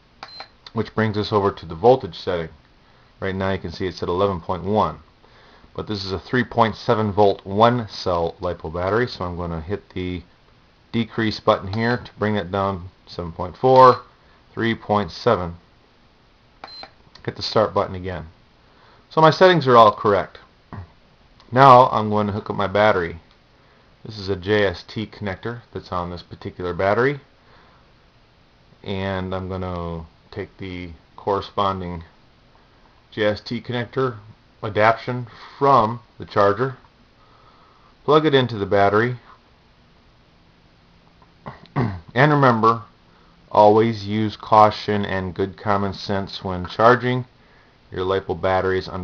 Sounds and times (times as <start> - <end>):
Inside, small room: 0.0 - 49.0
Speech: 0.7 - 2.6, 3.2 - 5.1, 5.8 - 10.3, 11.0 - 15.6, 17.2 - 18.4, 19.1 - 20.9, 21.5 - 23.2, 24.0 - 27.3, 28.8 - 32.1, 33.1 - 36.8, 38.1 - 39.3, 42.1 - 42.9, 43.5 - 47.3, 47.9 - 49.0.